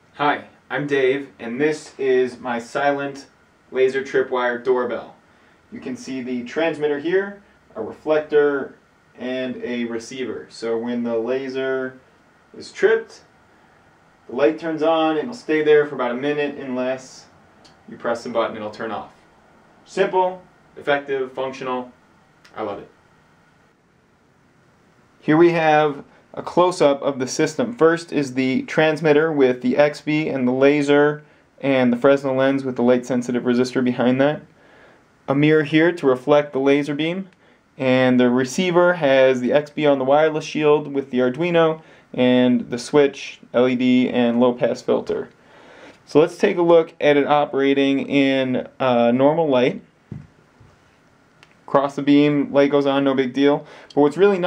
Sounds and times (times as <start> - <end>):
Speech: 0.2 - 13.3, 14.3 - 19.2, 19.8 - 23.0, 25.2 - 34.5, 35.3 - 45.4, 46.1 - 49.9, 51.7 - 54.4.